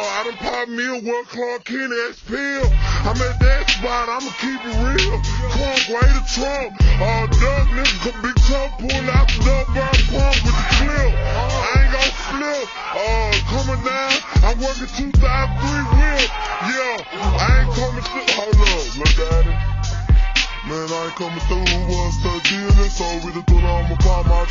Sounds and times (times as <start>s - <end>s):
Hip hop music: 0.0s - 24.5s.